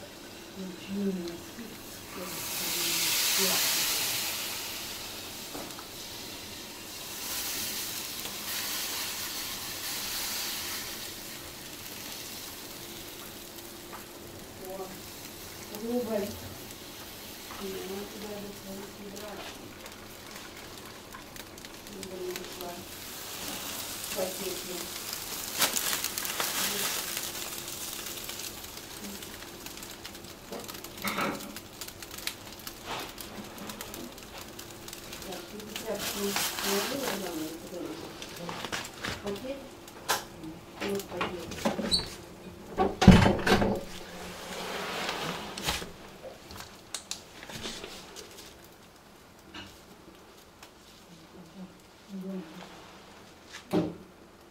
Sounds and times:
Speech: 0:00.6 - 0:04.1, 0:14.6 - 0:15.0, 0:15.7 - 0:16.4, 0:17.6 - 0:19.6, 0:21.9 - 0:22.9, 0:24.1 - 0:24.9, 0:26.6 - 0:26.9, 0:35.2 - 0:39.7, 0:40.4 - 0:41.8, 0:51.3 - 0:52.6.

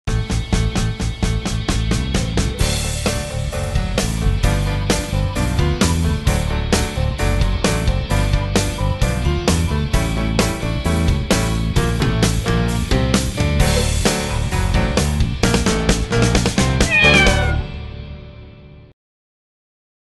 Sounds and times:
Music: 0:00.1 - 0:19.0
Meow: 0:16.8 - 0:17.8.

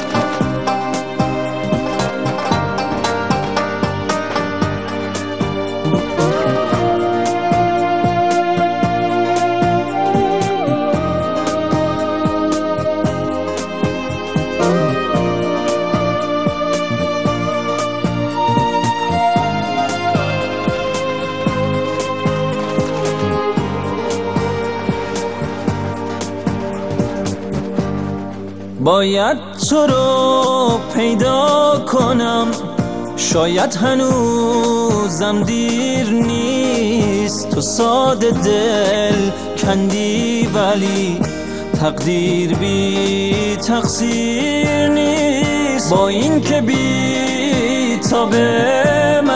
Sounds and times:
Background music: 0:00.0 - 0:49.3.

